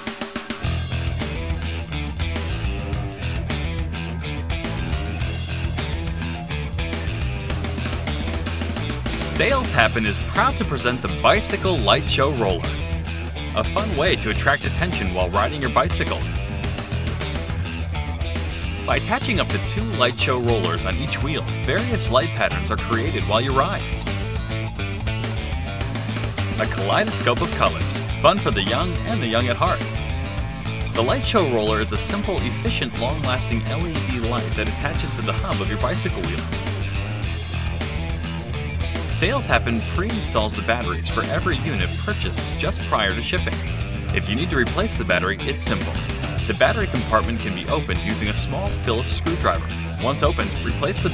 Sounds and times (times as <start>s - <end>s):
Music: 0.0s - 51.1s
Speech: 9.2s - 12.8s, 13.5s - 16.4s, 18.8s - 24.0s, 26.6s - 30.0s, 30.9s - 36.6s, 39.1s - 51.1s.